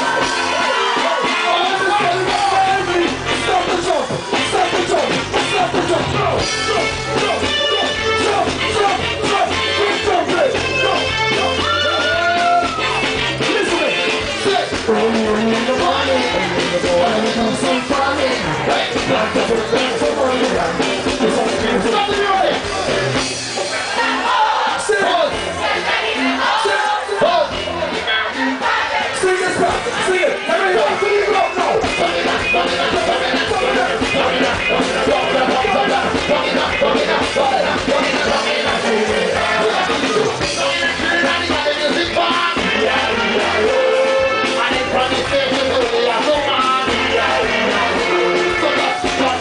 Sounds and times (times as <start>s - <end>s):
Music: 0.0s - 49.4s.